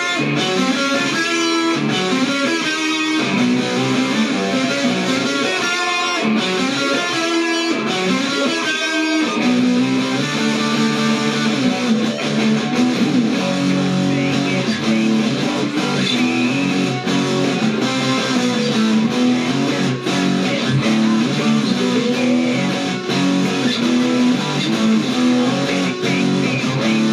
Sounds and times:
Electric guitar: 0.0 - 27.1.

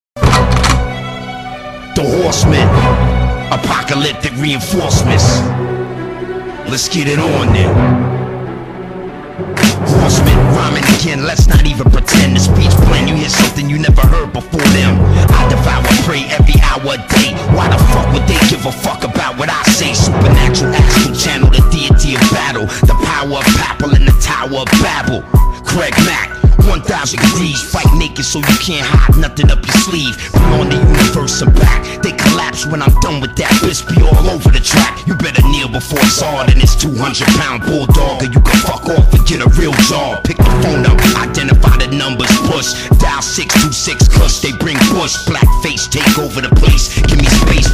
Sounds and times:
Music: 0.2 - 47.7
Speech: 2.0 - 2.9, 3.5 - 5.5, 6.7 - 7.8.

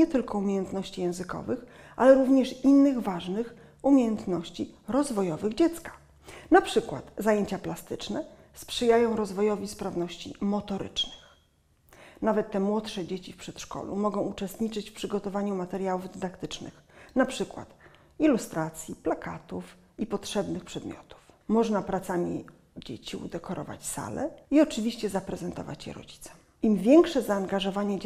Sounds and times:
Speech: 0.0 - 11.3, 12.2 - 28.0.

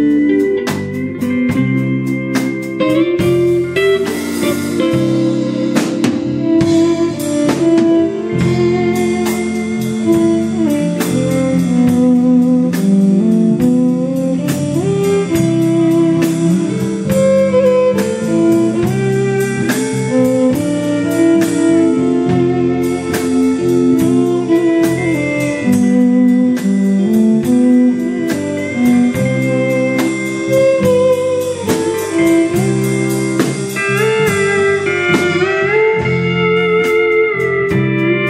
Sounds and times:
Saxophone: 0.0 - 38.3.

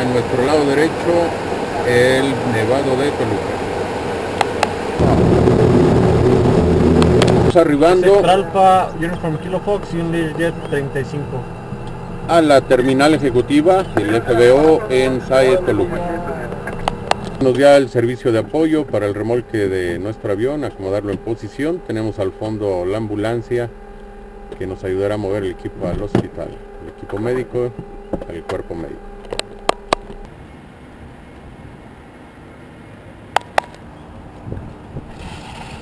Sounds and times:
Speech: 0.0 - 3.4, 7.5 - 11.4, 12.3 - 16.6, 17.4 - 23.7, 24.6 - 29.0
Vehicle: 0.0 - 35.8.

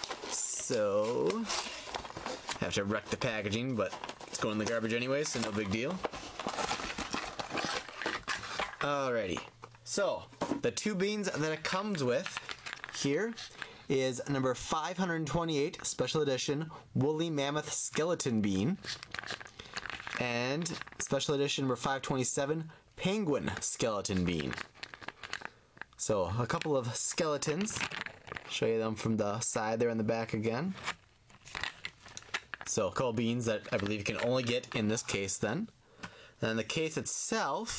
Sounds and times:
Inside, small room: 0.0 - 37.7
Speech: 0.3 - 1.6, 2.6 - 6.0, 8.8 - 12.4, 13.0 - 18.9, 20.2 - 24.6, 26.0 - 27.8, 28.5 - 30.8, 32.7 - 35.7, 36.4 - 37.7.

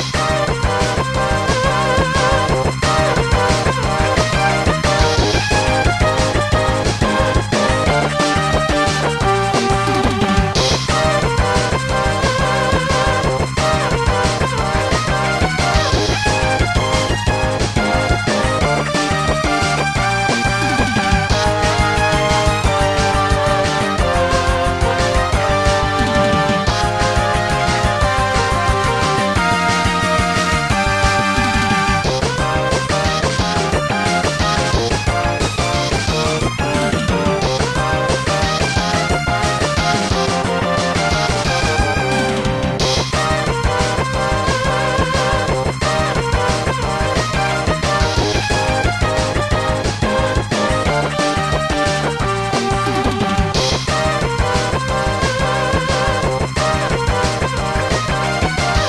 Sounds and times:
Music: 0.0 - 58.8.

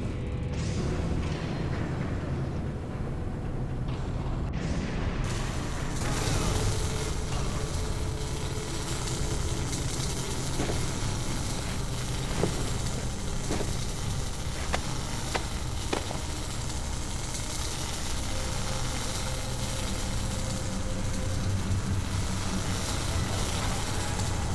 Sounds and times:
Sizzle: 5.3 - 24.5.

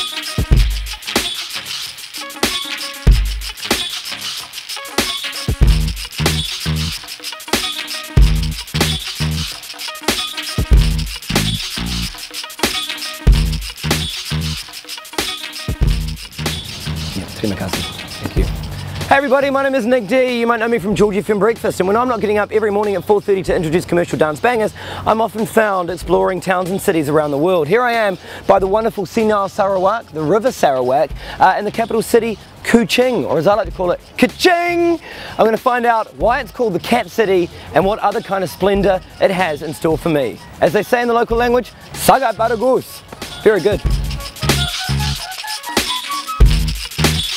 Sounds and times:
Music: 0.0 - 47.3
Speech: 17.2 - 18.5, 19.1 - 43.8.

